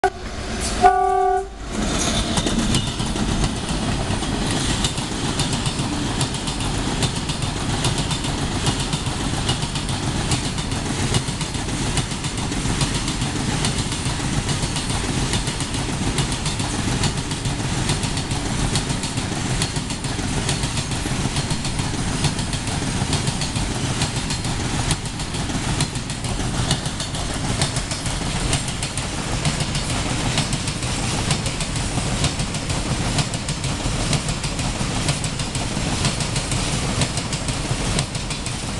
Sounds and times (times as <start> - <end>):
Train whistle: 0.0 - 1.6
Train horn: 0.0 - 1.7
Outside, urban or manmade: 0.0 - 38.7
Railroad car, train wagon: 0.0 - 38.7.